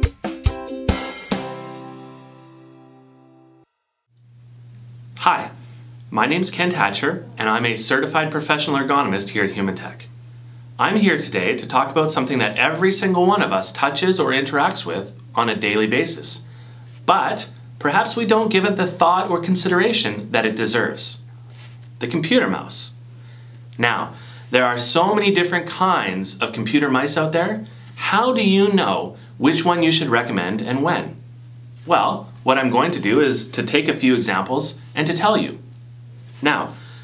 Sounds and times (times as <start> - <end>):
Speech: 5.2 - 10.1, 10.8 - 16.4, 17.1 - 21.3, 22.0 - 23.0, 23.8 - 31.2, 31.9 - 35.6, 36.4 - 36.8.